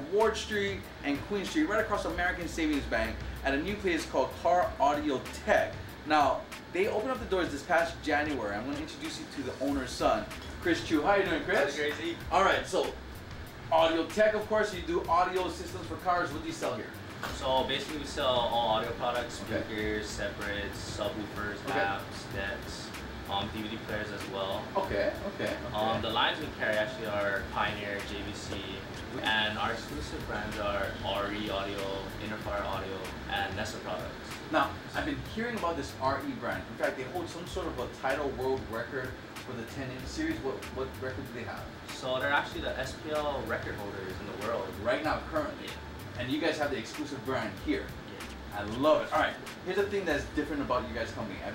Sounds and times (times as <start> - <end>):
Speech: 0.0 - 13.0, 13.7 - 51.5
Music: 0.0 - 51.5.